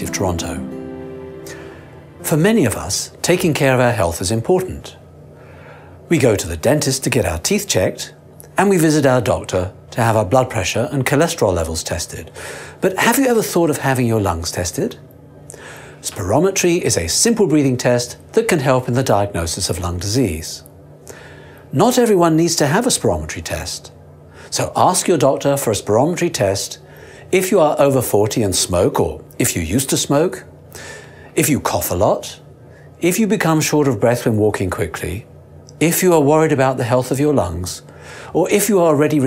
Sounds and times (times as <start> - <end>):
Speech: 0.0 - 0.7, 2.2 - 5.0, 6.1 - 15.1, 16.0 - 20.7, 21.7 - 30.5, 31.4 - 39.2.